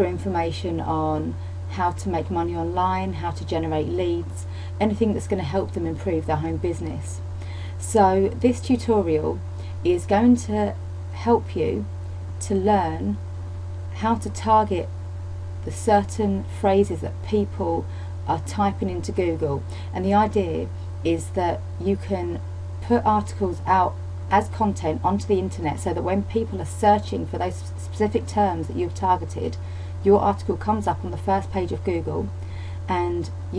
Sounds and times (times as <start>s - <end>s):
Speech: 0.0s - 7.2s, 7.8s - 13.2s, 14.0s - 14.9s, 15.6s - 32.3s, 32.9s - 33.5s.